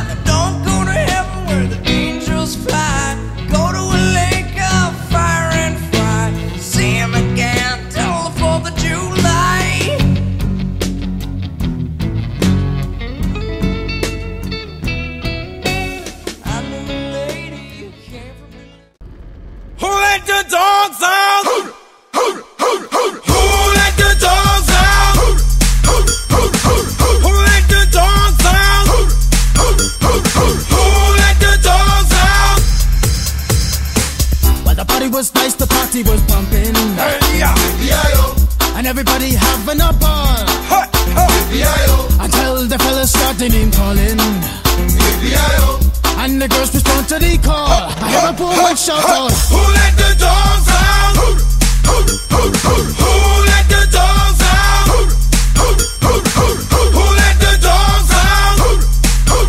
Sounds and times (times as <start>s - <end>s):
Steel guitar, slide guitar: 12.6s - 17.8s.